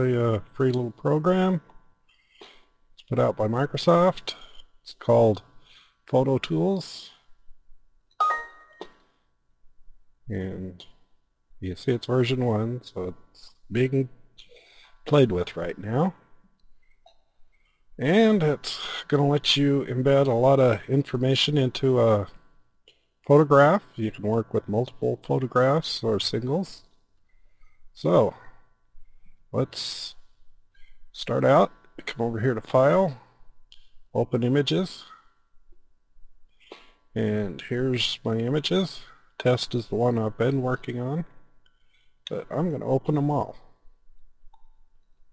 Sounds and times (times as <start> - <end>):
Speech: 0.0 - 1.7, 3.0 - 5.5, 6.1 - 7.3, 10.3 - 11.0, 11.6 - 14.2, 15.0 - 16.2, 18.0 - 22.4, 23.3 - 26.9, 28.0 - 28.6, 29.5 - 30.3, 31.1 - 33.3, 34.2 - 35.3, 37.2 - 41.4, 42.3 - 43.8.